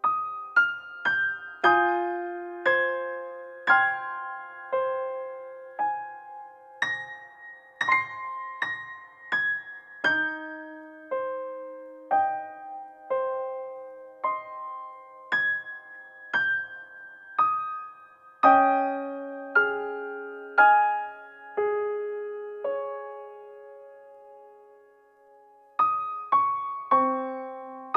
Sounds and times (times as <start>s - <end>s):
Music: 0.0s - 27.9s.